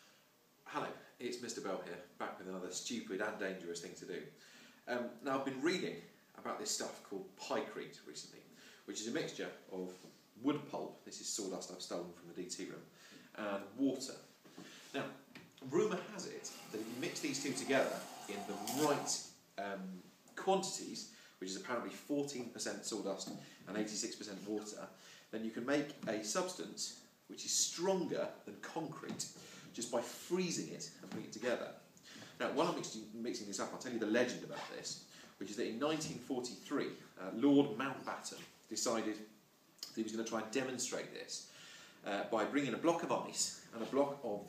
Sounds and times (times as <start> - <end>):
Speech: 0.6 - 14.3, 14.9 - 44.4.